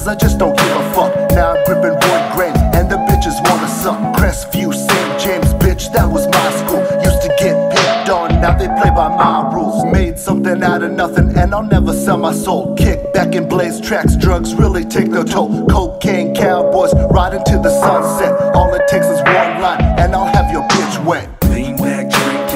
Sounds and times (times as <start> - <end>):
Hip hop music: 0.0 - 22.5
Rapping: 0.0 - 22.5.